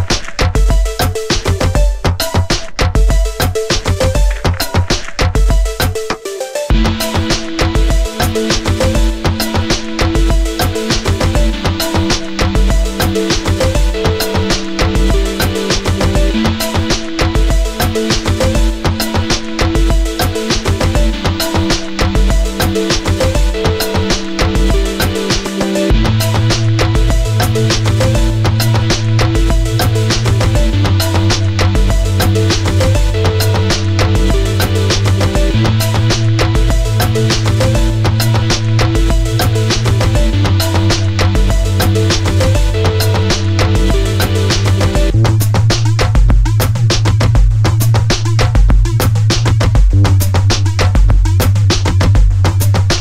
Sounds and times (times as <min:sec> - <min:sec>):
Music: 0:00.0 - 0:53.0.